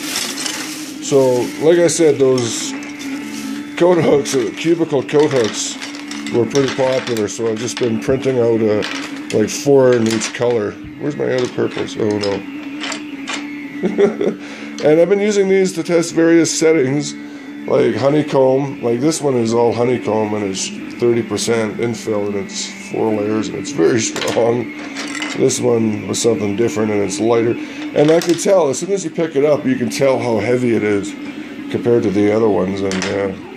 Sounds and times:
Speech: 1.0s - 2.8s, 3.7s - 12.5s, 14.8s - 24.7s, 25.4s - 33.5s.

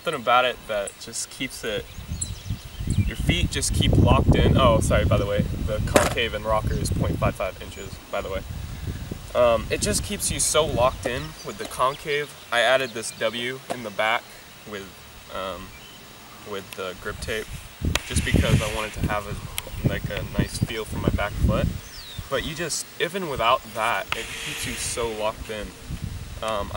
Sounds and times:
Insect: 0.0s - 26.7s.

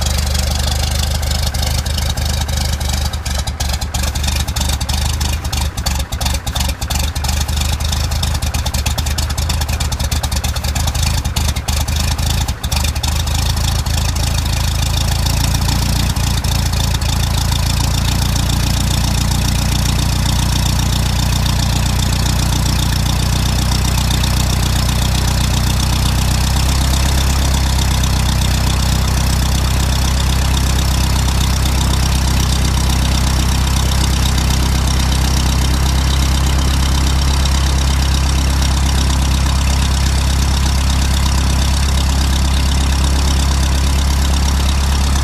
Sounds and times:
Vehicle: 0.0s - 45.2s.

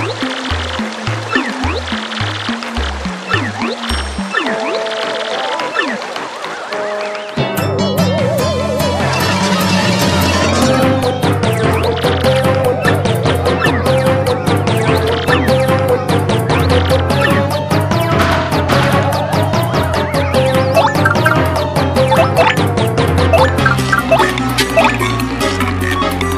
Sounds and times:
Music: 0.0s - 26.3s.

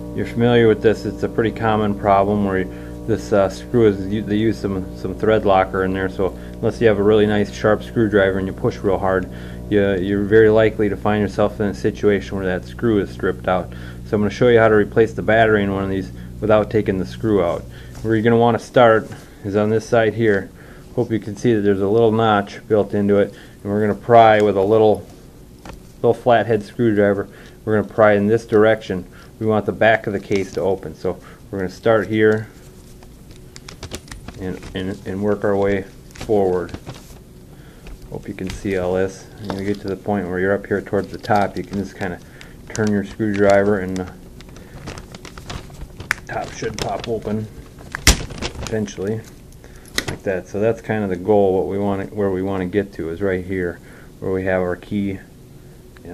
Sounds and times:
Speech: 0.2s - 25.1s, 26.0s - 32.5s, 34.4s - 36.8s, 38.1s - 44.2s, 46.3s - 47.6s, 48.6s - 49.3s, 50.2s - 55.3s.

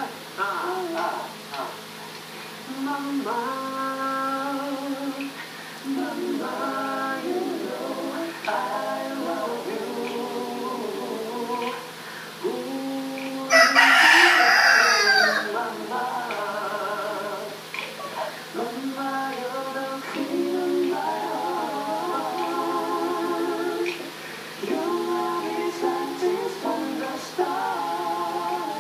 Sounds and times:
Male singing: 0.0s - 1.8s, 2.7s - 17.6s, 18.5s - 28.8s
Choir: 0.0s - 1.9s, 2.7s - 28.8s.

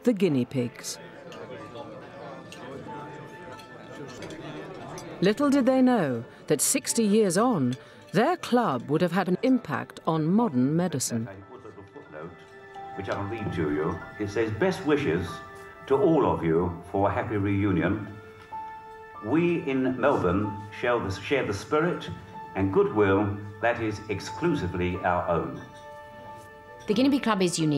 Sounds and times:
Music: 0.0s - 27.7s.

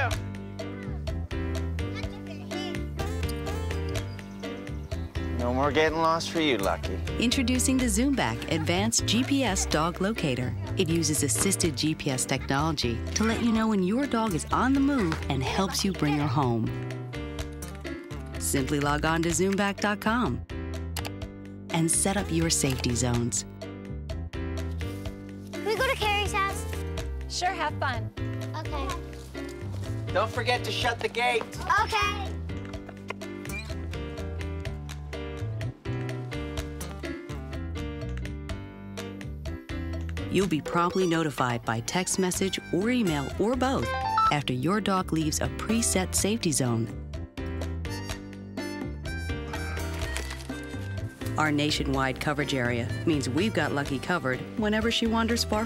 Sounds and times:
Music: 0.0s - 55.6s.

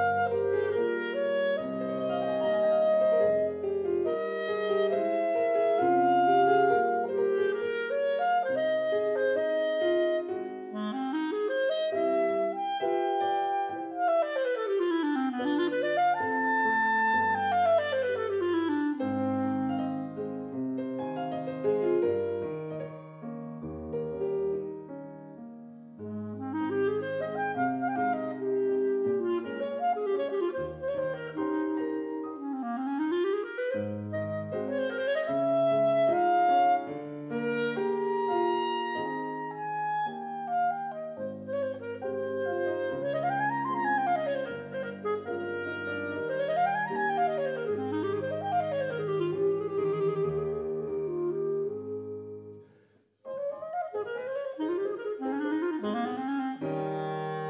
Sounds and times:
Clarinet: 0.0s - 57.4s
Piano: 0.0s - 57.4s.

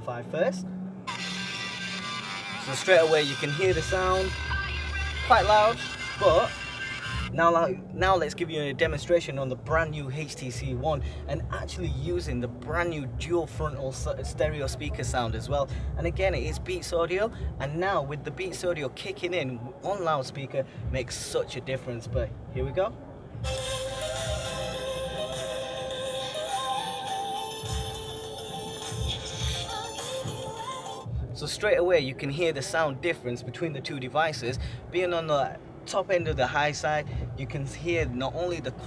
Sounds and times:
Speech: 7.3s - 23.0s, 31.4s - 38.8s.

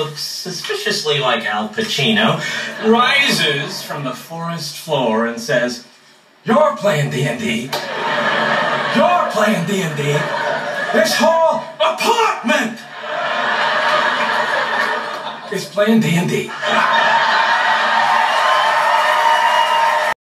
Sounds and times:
Speech: 0.0s - 7.8s, 8.9s - 12.9s, 15.5s - 16.6s.

